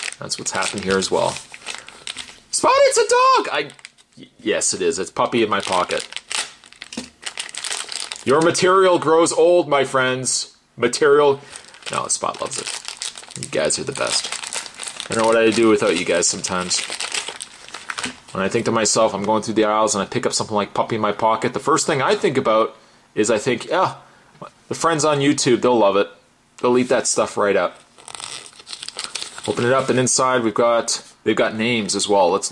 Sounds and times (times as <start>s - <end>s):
Speech: 0.2s - 1.4s, 2.5s - 6.1s, 8.2s - 12.8s, 13.4s - 14.4s, 15.1s - 16.9s, 18.3s - 27.8s, 29.5s - 32.5s.